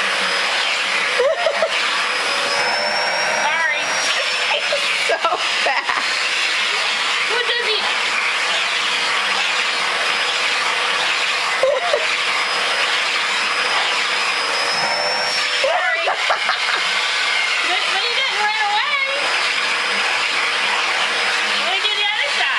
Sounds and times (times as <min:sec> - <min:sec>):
Speech: 0:07.3 - 0:07.9, 0:17.7 - 0:19.2, 0:21.6 - 0:22.5.